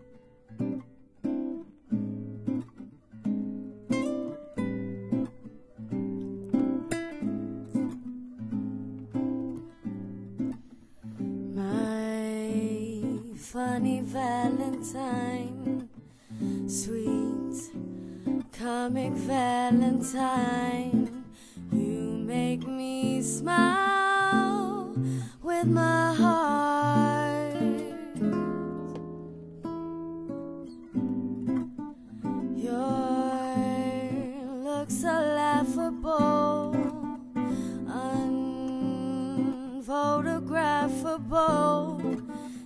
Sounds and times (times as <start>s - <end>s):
Music: 0.0s - 42.6s
Female singing: 11.5s - 16.0s, 16.6s - 28.7s, 32.4s - 42.6s.